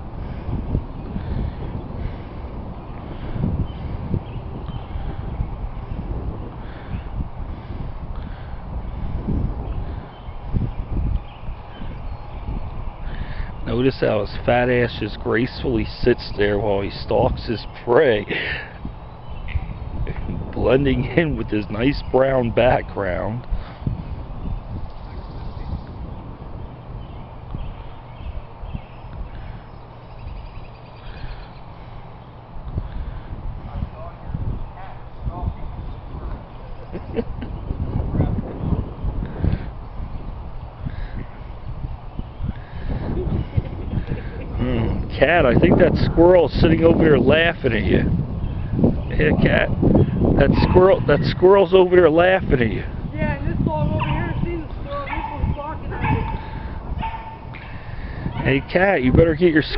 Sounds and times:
Speech: 0:13.7 - 0:18.3, 0:49.1 - 0:49.7, 0:50.4 - 0:56.2, 0:58.4 - 0:59.7.

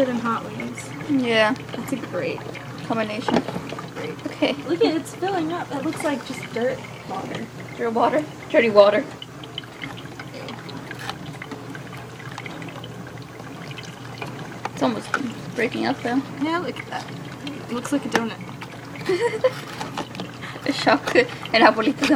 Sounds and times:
Trickle, dribble: 0:00.0 - 0:22.1.

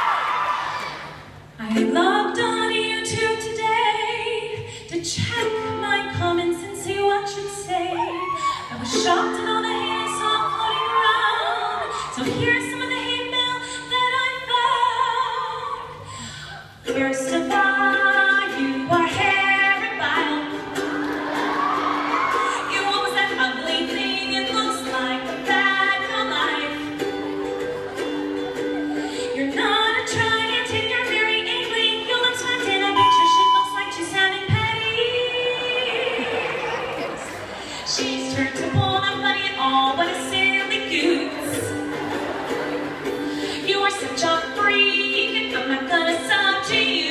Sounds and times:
Music: 0:01.1 - 0:47.1
Female singing: 0:01.6 - 0:16.0, 0:16.9 - 0:20.7, 0:22.5 - 0:27.0, 0:29.3 - 0:37.2, 0:37.9 - 0:41.8, 0:43.6 - 0:47.1.

